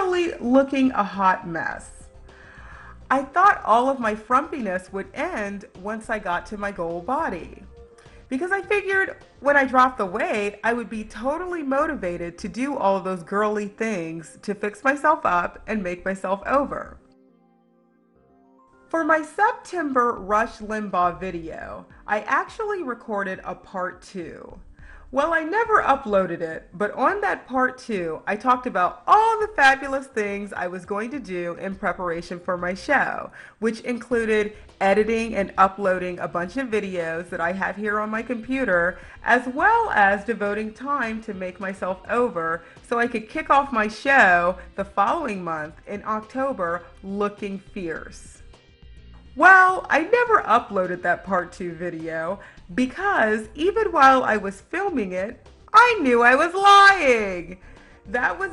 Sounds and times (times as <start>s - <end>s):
Speech: 0.0s - 2.0s, 3.1s - 7.7s, 8.3s - 17.0s, 19.0s - 24.6s, 25.2s - 48.4s, 49.4s - 58.5s
Music: 0.0s - 58.5s.